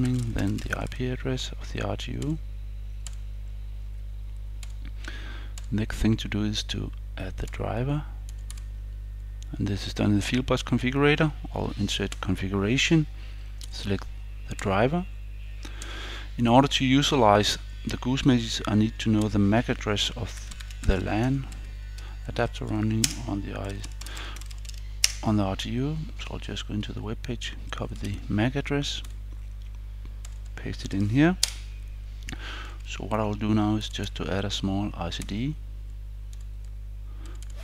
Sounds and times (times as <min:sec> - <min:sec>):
Speech: 0:00.0 - 0:02.4, 0:05.7 - 0:08.2, 0:09.5 - 0:13.1, 0:13.7 - 0:15.1, 0:16.4 - 0:21.6, 0:22.2 - 0:24.0, 0:25.2 - 0:29.1, 0:30.6 - 0:31.4, 0:32.9 - 0:35.6.